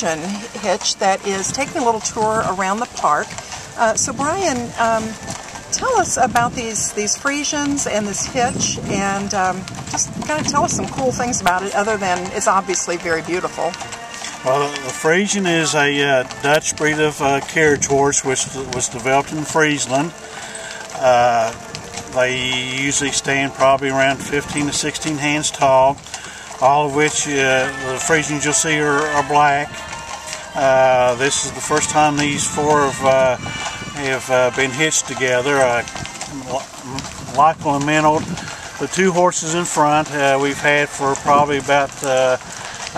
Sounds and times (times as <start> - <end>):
Speech: 0.0 - 5.2, 5.8 - 13.8, 14.4 - 20.1, 21.0 - 21.6, 22.2 - 26.0, 26.6 - 29.7, 30.6 - 33.4, 34.0 - 42.4
Music: 0.0 - 36.8
Clip-clop: 0.0 - 42.9.